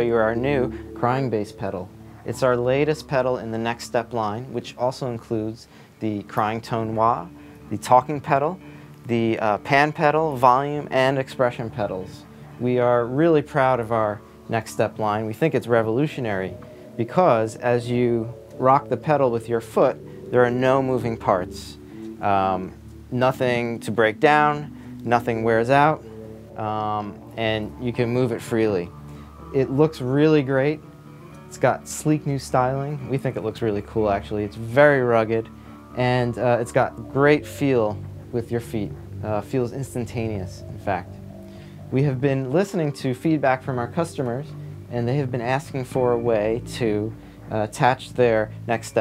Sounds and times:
Speech: 0:00.0 - 0:28.9, 0:29.5 - 0:30.8, 0:31.5 - 0:41.2, 0:41.9 - 0:49.0
Music: 0:00.0 - 0:49.0.

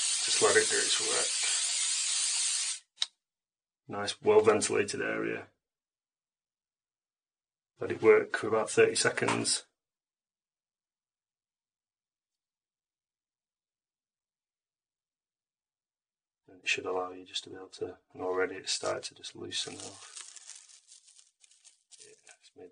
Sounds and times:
Speech: 0:00.3 - 0:01.5, 0:03.9 - 0:05.6, 0:07.8 - 0:09.8, 0:16.5 - 0:20.1, 0:22.0 - 0:22.7.

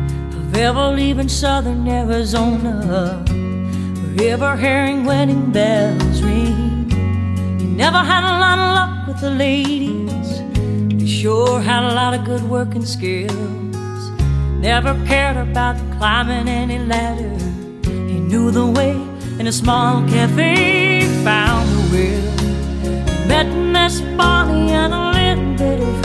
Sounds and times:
Country: 0:00.0 - 0:26.0.

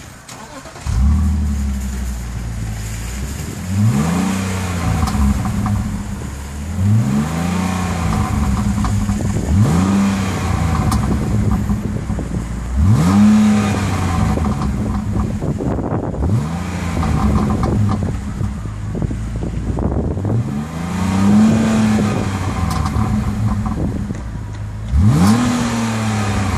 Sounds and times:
Car: 0:00.0 - 0:26.5.

